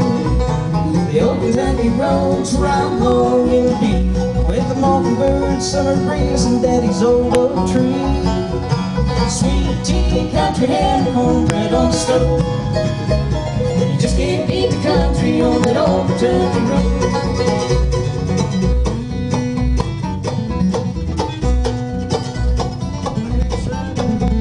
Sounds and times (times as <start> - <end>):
Banjo: 0.0 - 24.4
Guitar: 0.0 - 24.4.